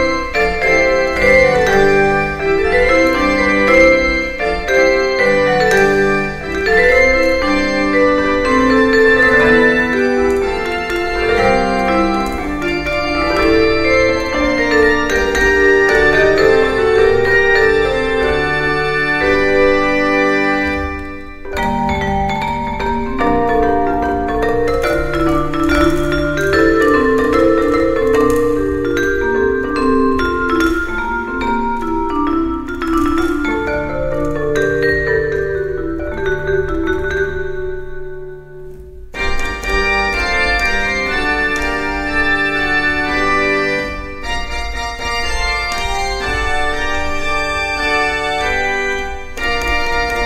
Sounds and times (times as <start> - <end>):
Keyboard (musical): 0.0 - 50.2
Vibraphone: 0.0 - 50.2.